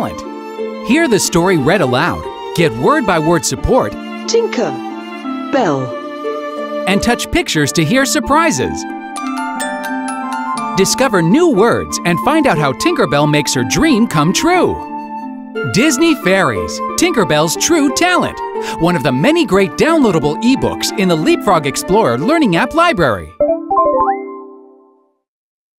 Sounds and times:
Speech: 0.0 - 0.2, 0.9 - 4.8, 5.6 - 5.9, 6.9 - 8.8, 10.8 - 14.8, 15.6 - 23.4
Music: 0.0 - 25.3.

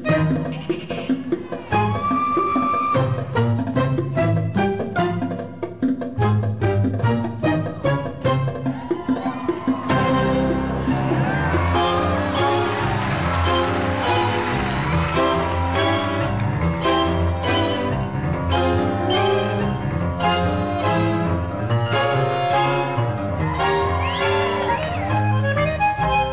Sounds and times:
Music: 0.0 - 26.3.

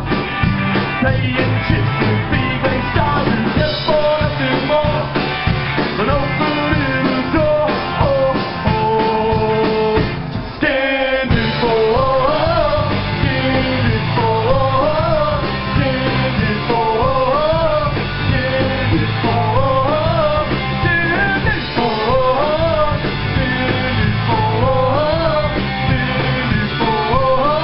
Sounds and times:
Music: 0.0 - 27.6.

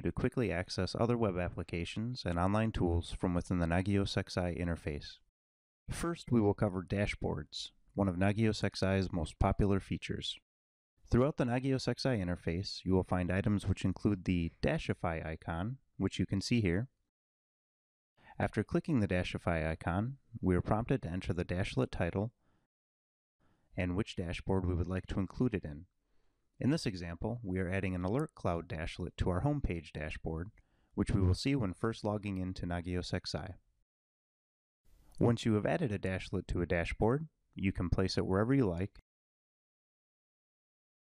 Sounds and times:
Speech: 0.0 - 5.3, 5.9 - 10.4, 11.1 - 17.0, 18.3 - 22.4, 23.8 - 25.9, 26.6 - 33.6, 35.2 - 39.0.

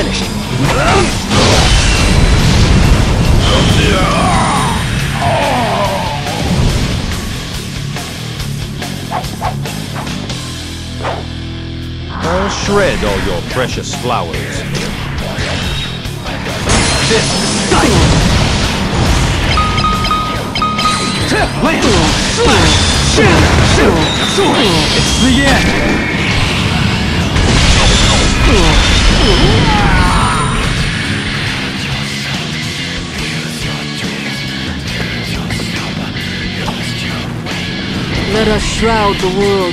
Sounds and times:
Music: 0.0 - 39.7
Speech: 12.2 - 15.4.

